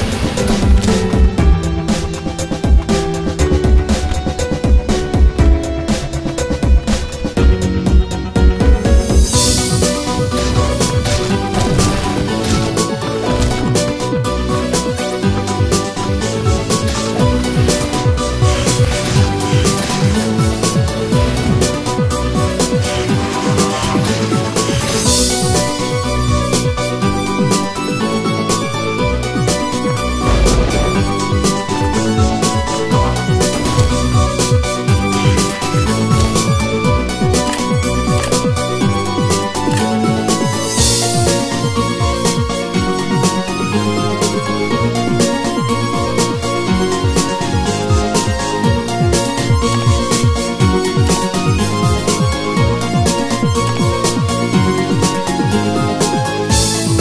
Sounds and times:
Music: 0.0s - 57.0s.

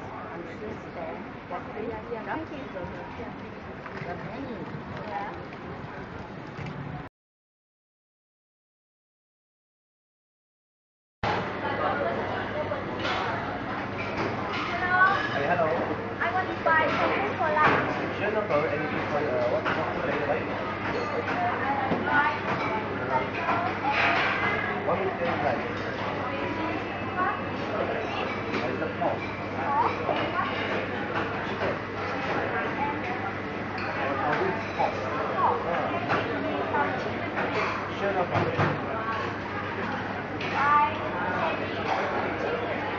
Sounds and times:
Inside, public space: 0.0s - 7.1s, 11.2s - 42.9s
Speech: 11.5s - 13.8s, 14.6s - 42.9s.

